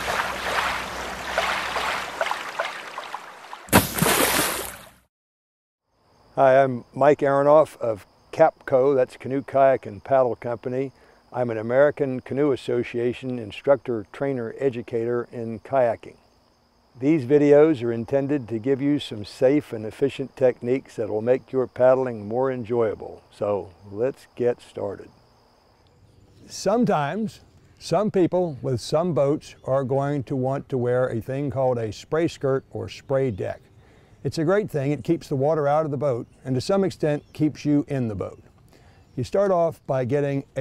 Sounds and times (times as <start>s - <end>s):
Speech: 6.4s - 16.2s, 17.0s - 25.1s, 26.5s - 33.6s, 34.3s - 38.4s, 39.2s - 40.6s.